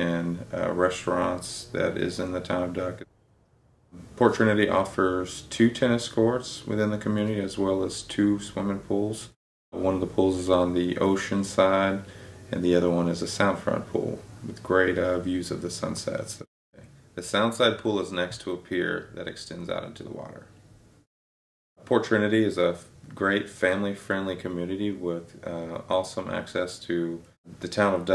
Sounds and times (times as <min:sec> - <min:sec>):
Speech: 0:00.0 - 0:03.1, 0:04.0 - 0:20.5, 0:21.8 - 0:28.1.